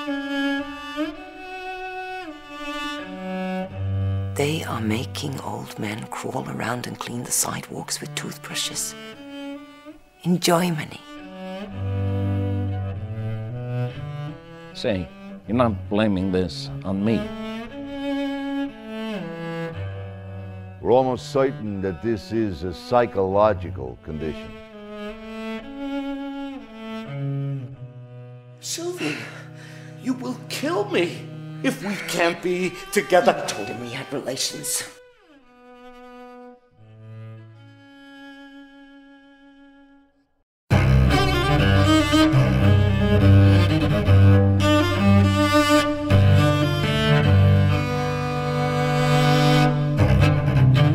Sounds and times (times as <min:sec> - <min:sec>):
Music: 0:00.0 - 0:50.9
Speech: 0:04.4 - 0:09.0, 0:10.2 - 0:11.1, 0:14.8 - 0:17.3, 0:20.8 - 0:24.5, 0:28.6 - 0:29.4, 0:30.0 - 0:35.0.